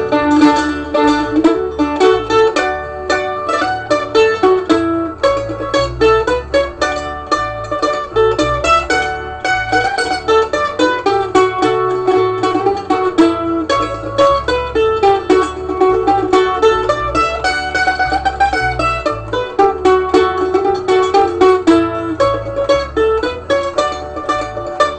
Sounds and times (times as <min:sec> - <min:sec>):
Mandolin: 0:00.0 - 0:24.9
Ukulele: 0:00.0 - 0:24.9.